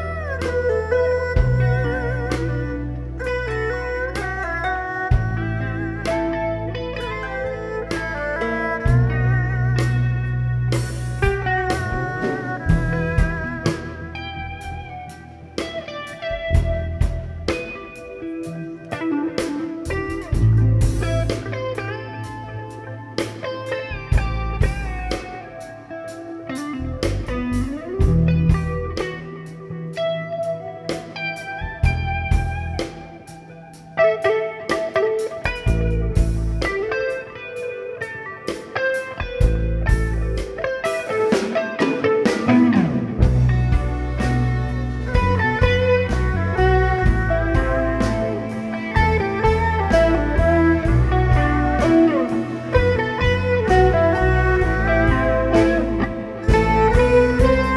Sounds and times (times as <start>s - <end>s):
Music: 0.0s - 57.7s.